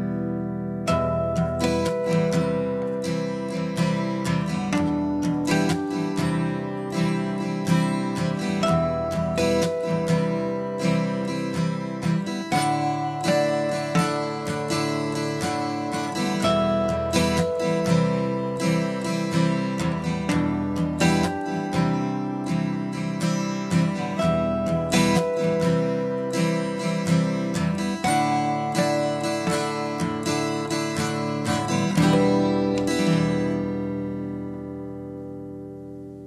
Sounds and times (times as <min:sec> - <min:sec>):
Acoustic guitar: 0:00.0 - 0:36.2.